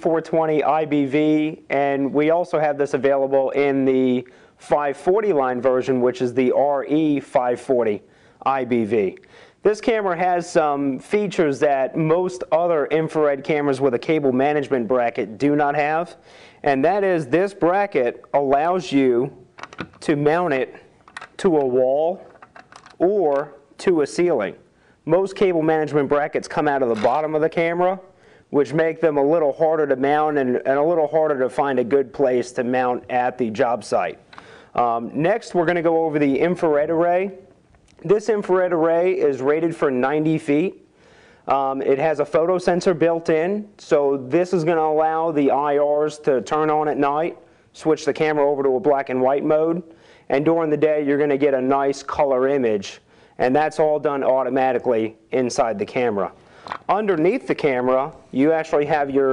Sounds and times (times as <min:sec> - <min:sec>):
Speech: 0:00.0 - 0:19.4, 0:20.0 - 0:22.3, 0:23.0 - 0:34.2, 0:34.8 - 0:40.8, 0:41.5 - 0:59.3.